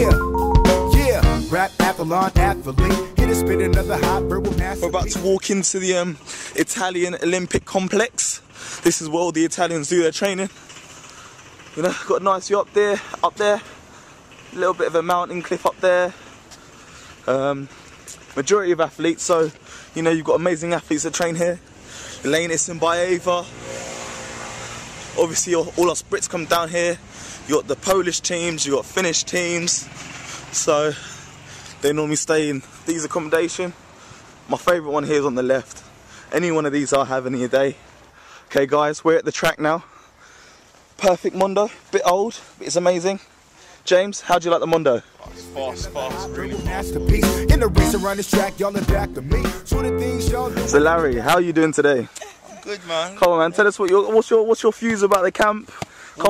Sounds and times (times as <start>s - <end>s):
Music: 0.0s - 5.4s, 45.3s - 51.3s
Male speech, man speaking: 4.7s - 10.5s, 11.8s - 13.7s, 14.6s - 16.2s, 17.3s - 17.7s, 18.3s - 21.6s, 22.2s - 23.5s, 25.2s - 29.9s, 30.6s - 31.0s, 31.8s - 33.8s, 34.5s - 37.8s, 38.5s - 39.8s, 41.0s - 43.3s, 43.9s - 47.0s, 50.6s - 56.2s.